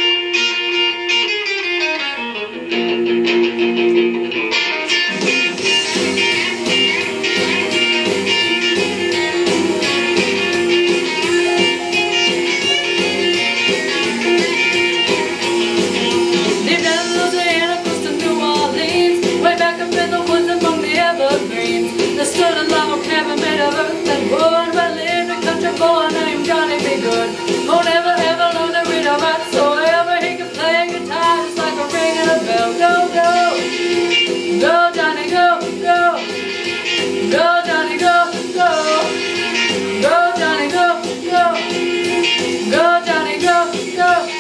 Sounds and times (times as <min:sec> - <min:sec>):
Music: 0:00.0 - 0:44.4
Female singing: 0:16.7 - 0:33.7, 0:34.6 - 0:36.3, 0:37.3 - 0:39.2, 0:40.0 - 0:41.8, 0:42.7 - 0:44.4.